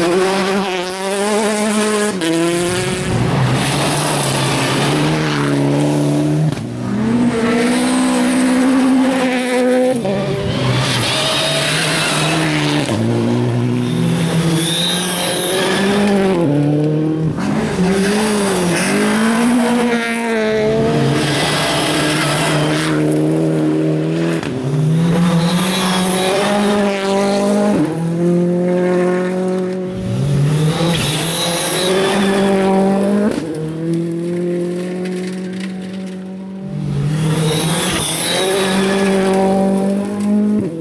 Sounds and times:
Race car, auto racing: 0.0s - 40.8s
Skidding: 0.0s - 40.8s
Tire squeal: 10.0s - 13.0s, 13.8s - 16.2s, 18.0s - 23.2s, 25.0s - 27.3s, 30.0s - 32.9s, 37.1s - 39.6s.

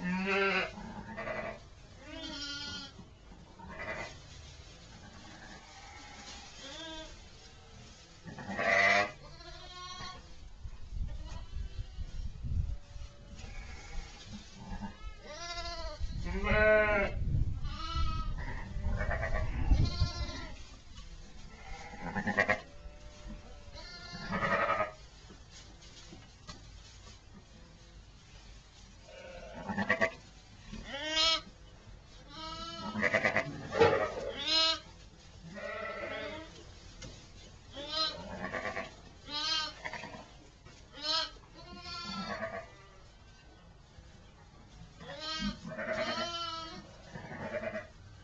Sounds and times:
Sheep: 0.0s - 10.4s, 11.0s - 43.6s, 44.6s - 48.2s.

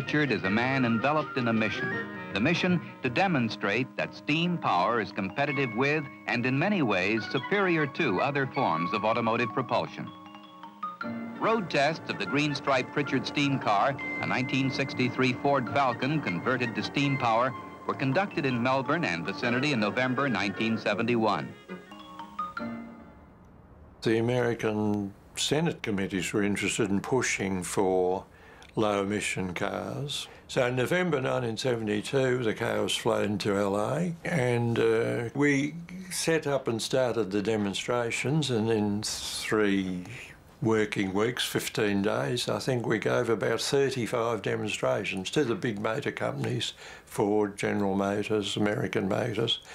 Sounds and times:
Speech: 0.0s - 10.2s, 11.4s - 21.6s, 24.0s - 49.6s
Music: 0.0s - 23.5s.

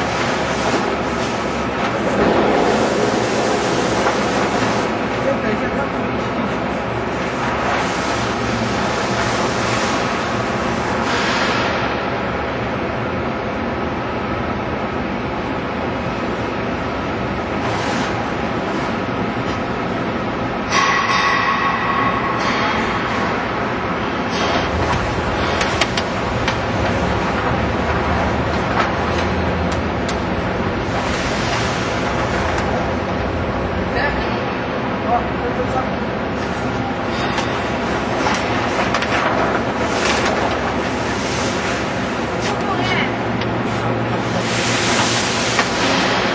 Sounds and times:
Speech: 5.2s - 6.5s, 33.9s - 36.0s, 42.4s - 43.2s.

